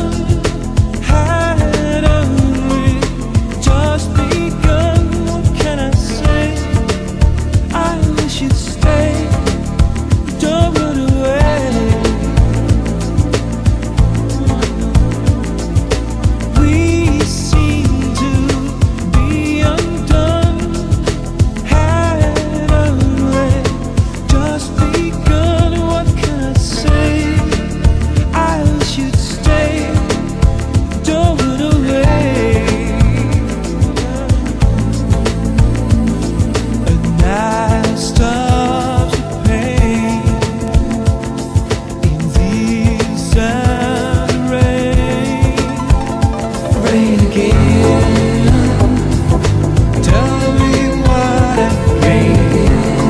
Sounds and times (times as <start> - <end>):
Music: 0.0 - 53.0.